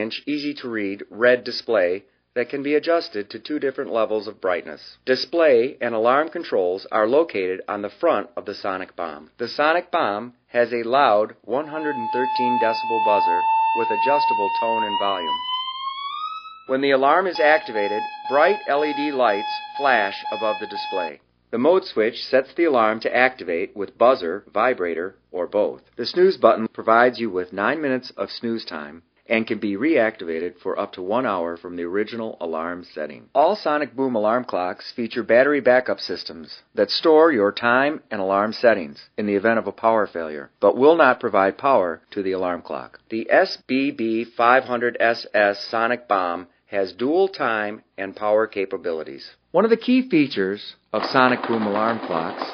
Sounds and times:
Speech: 0:00.0 - 0:15.3, 0:16.7 - 0:52.5.

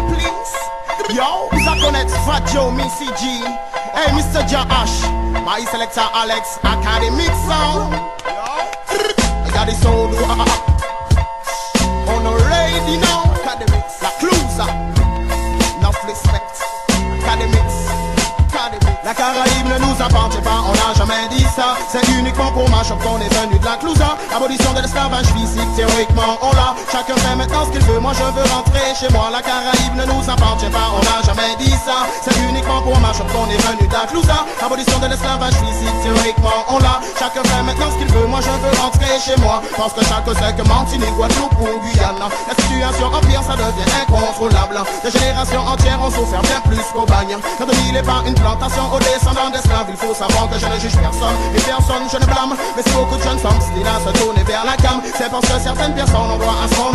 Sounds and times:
Music: 0:00.0 - 0:56.9.

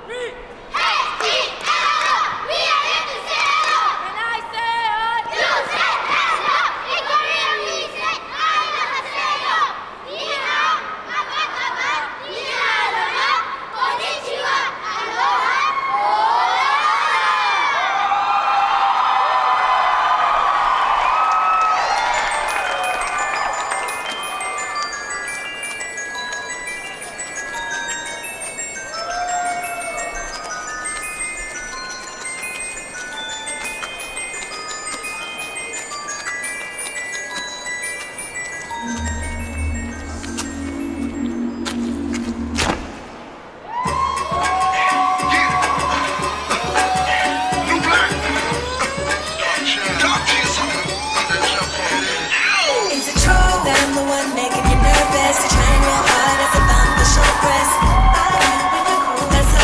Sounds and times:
Glockenspiel: 0:21.7 - 0:42.6, 0:45.3 - 0:59.6
Marimba, xylophone: 0:21.7 - 0:43.1, 0:44.3 - 0:59.6.

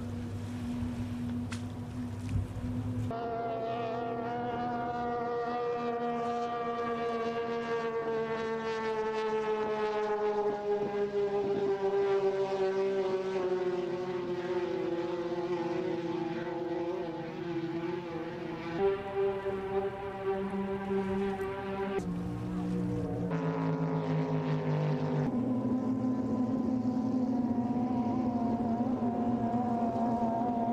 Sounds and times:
Motorboat, speedboat: 0:00.0 - 0:30.7.

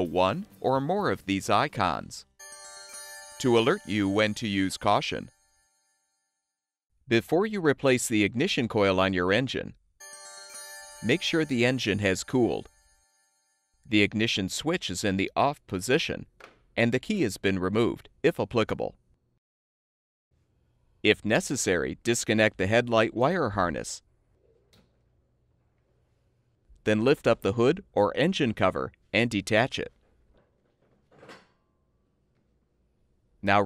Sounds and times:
Speech: 0:00.0 - 0:02.3, 0:03.4 - 0:05.3, 0:07.1 - 0:09.8, 0:11.1 - 0:12.7, 0:13.9 - 0:19.0, 0:21.1 - 0:24.0, 0:26.8 - 0:30.0, 0:33.4 - 0:33.6.

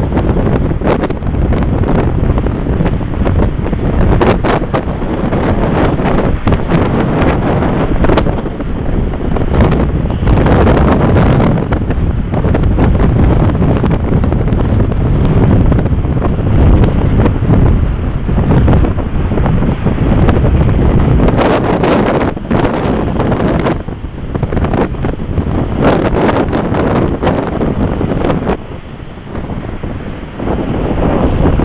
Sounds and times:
Waves, surf: 0:00.0 - 0:31.6.

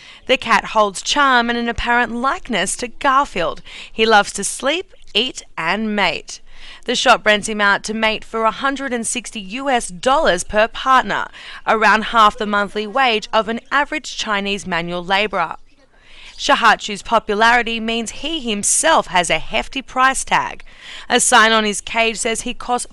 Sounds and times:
Speech: 0:00.3 - 0:15.6, 0:16.4 - 0:22.9.

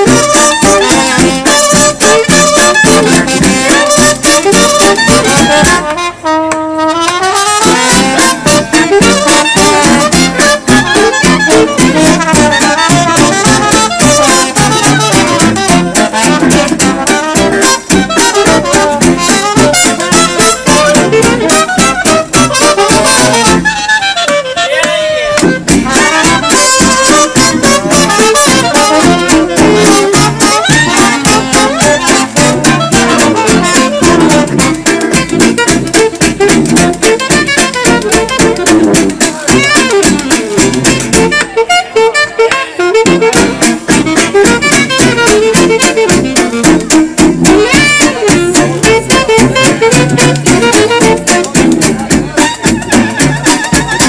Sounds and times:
Clarinet: 0:00.0 - 0:54.0
Saxophone: 0:00.0 - 0:54.0
Trumpet: 0:00.0 - 0:54.0.

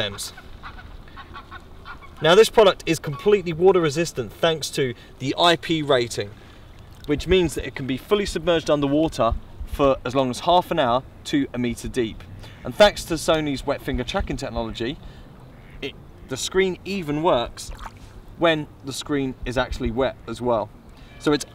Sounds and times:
Speech: 0:00.0 - 0:00.4, 0:02.2 - 0:06.3, 0:07.1 - 0:15.0, 0:15.8 - 0:17.7, 0:18.4 - 0:21.5.

